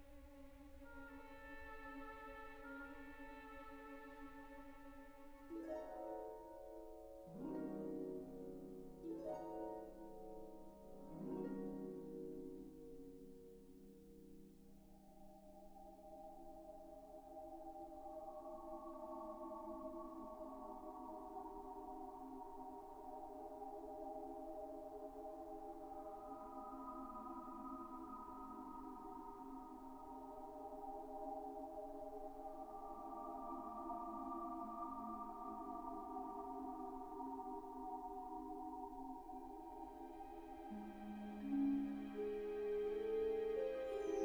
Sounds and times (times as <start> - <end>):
Music: 0.0 - 44.2.